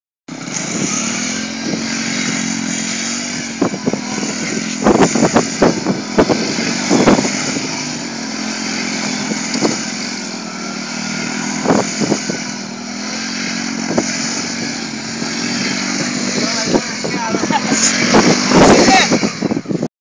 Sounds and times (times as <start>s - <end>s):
Motorcycle: 0.3s - 19.9s
Speech: 16.4s - 18.0s, 18.8s - 19.2s.